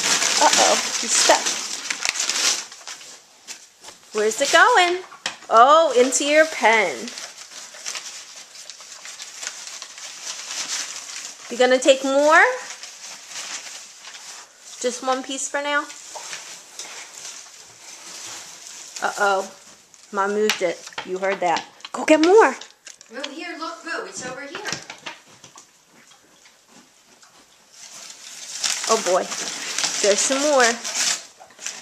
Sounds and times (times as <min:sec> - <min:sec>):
Speech: 0:00.4 - 0:01.6, 0:04.2 - 0:07.2, 0:11.5 - 0:12.7, 0:14.8 - 0:16.0, 0:19.0 - 0:24.9, 0:28.9 - 0:30.9.